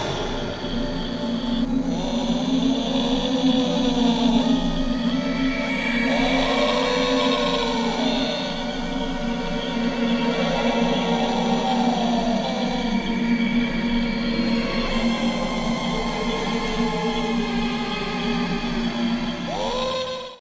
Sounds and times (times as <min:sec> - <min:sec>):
Music: 0:00.0 - 0:20.4.